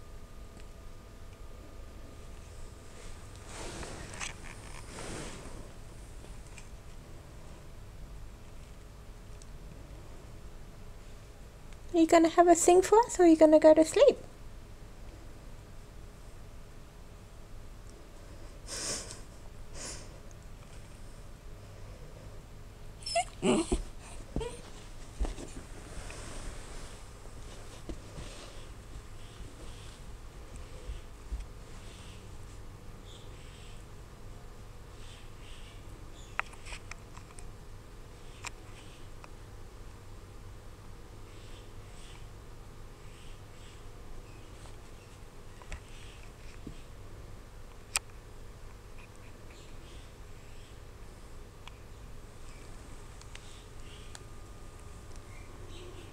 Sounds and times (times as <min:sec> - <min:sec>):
Inside, small room: 0:00.0 - 0:56.1.